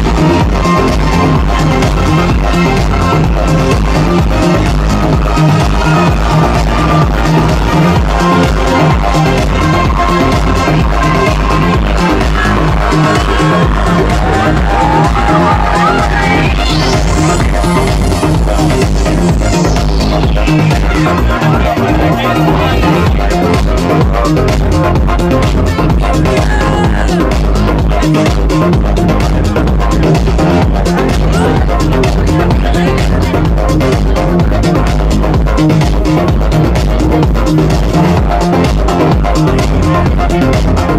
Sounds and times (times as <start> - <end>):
Music: 0.0 - 40.9
Speech: 20.8 - 24.0, 26.0 - 28.2, 29.2 - 34.9.